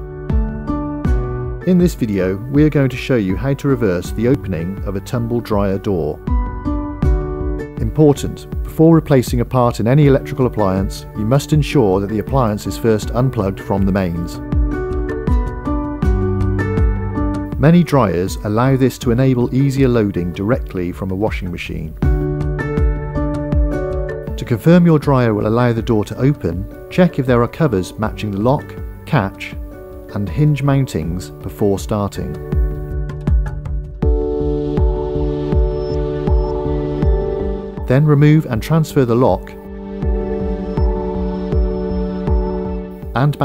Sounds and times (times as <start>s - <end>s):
Music: 0.0s - 43.4s
Speech: 1.7s - 6.2s, 7.8s - 14.4s, 17.6s - 22.0s, 24.4s - 32.4s, 37.9s - 39.6s, 43.2s - 43.4s.